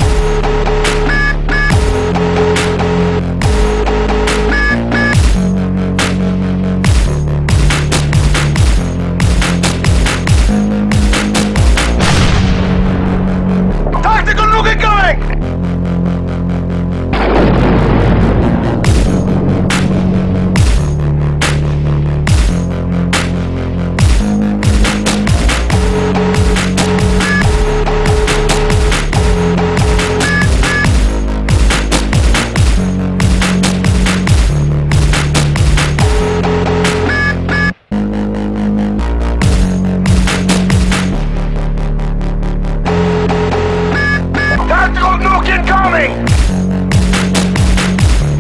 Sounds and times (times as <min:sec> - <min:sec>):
Speech: 0:14.0 - 0:15.4, 0:44.6 - 0:46.3.